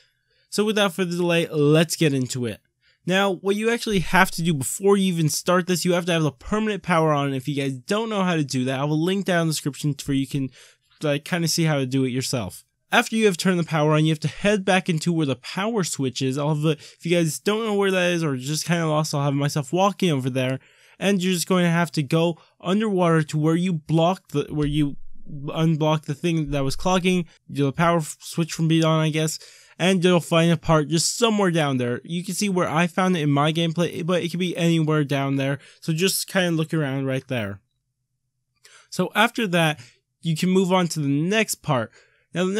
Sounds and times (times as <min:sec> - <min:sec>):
Speech: 0:00.5 - 0:37.6, 0:38.8 - 0:42.5.